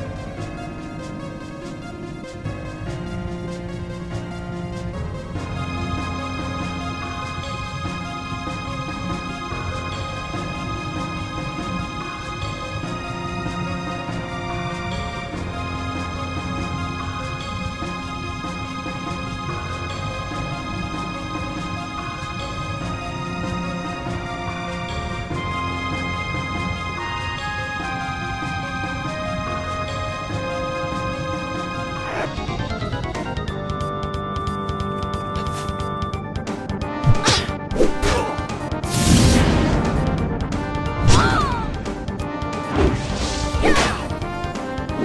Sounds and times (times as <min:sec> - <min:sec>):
Theme music: 0:00.0 - 0:45.0.